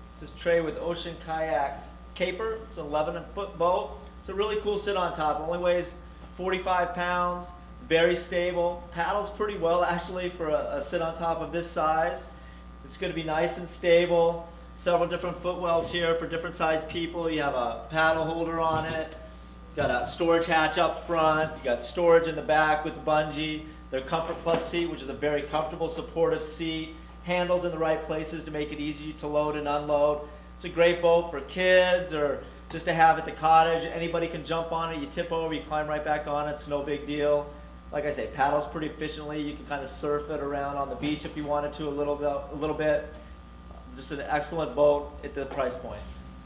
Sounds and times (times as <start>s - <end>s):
Speech: 0.1s - 43.2s, 43.9s - 46.1s.